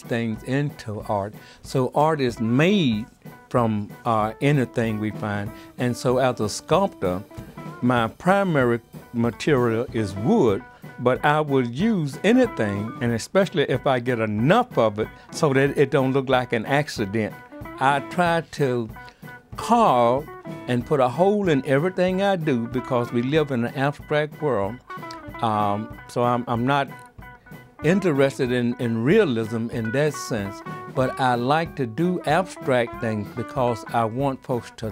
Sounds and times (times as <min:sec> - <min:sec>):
Speech: 0:00.0 - 0:19.0, 0:19.6 - 0:24.8, 0:25.4 - 0:27.0, 0:27.8 - 0:34.9
Music: 0:00.0 - 0:34.9.